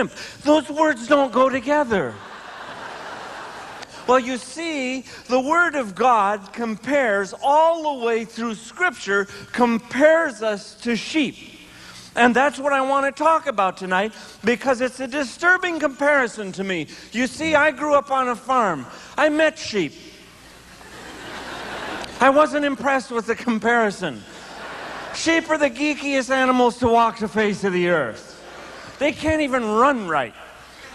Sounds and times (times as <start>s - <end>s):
Speech: 0.0s - 2.2s, 4.0s - 11.6s, 12.2s - 20.2s, 22.2s - 24.3s, 25.2s - 28.4s, 29.0s - 30.4s.